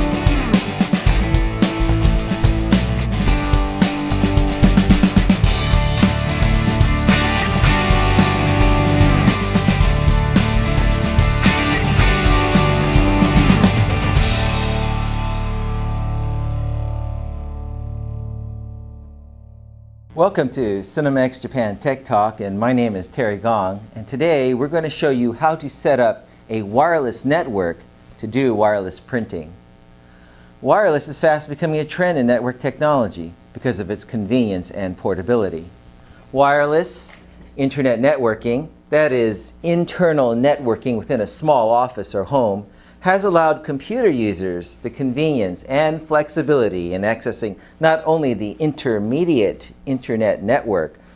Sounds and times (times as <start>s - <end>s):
Music: 0.0s - 20.2s.